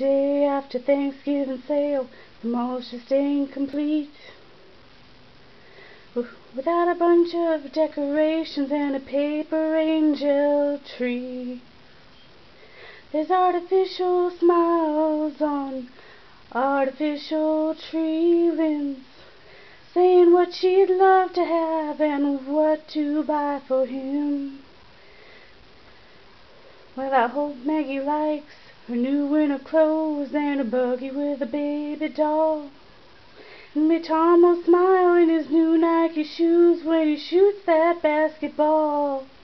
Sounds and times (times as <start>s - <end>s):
Female singing: 0.0s - 4.4s, 6.2s - 11.7s, 13.1s - 19.3s, 19.9s - 24.7s, 27.0s - 32.8s, 33.8s - 39.4s.